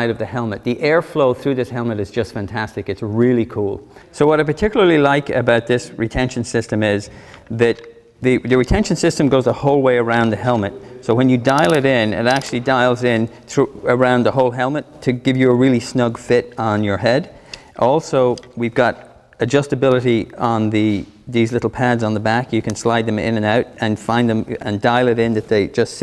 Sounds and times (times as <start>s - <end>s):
Speech: 0.0s - 26.0s.